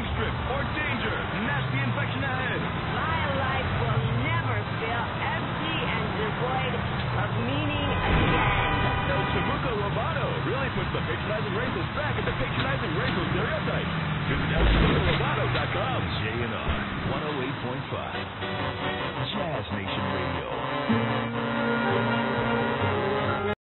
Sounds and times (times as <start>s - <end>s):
Speech: 0.0s - 18.2s, 19.2s - 20.7s, 23.2s - 23.6s
Music: 18.2s - 23.6s.